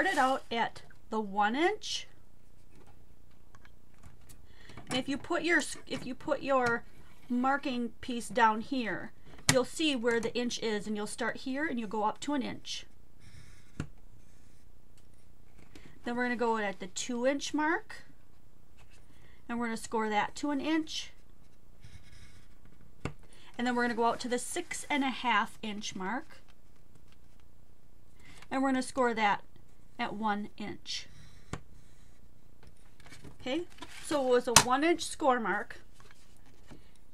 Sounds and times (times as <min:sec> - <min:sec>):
Speech: 0:00.0 - 0:02.1, 0:04.9 - 0:12.9, 0:16.0 - 0:18.1, 0:19.5 - 0:21.2, 0:23.6 - 0:26.4, 0:28.5 - 0:29.4, 0:30.0 - 0:31.1, 0:33.4 - 0:35.8
Inside, small room: 0:00.0 - 0:37.1.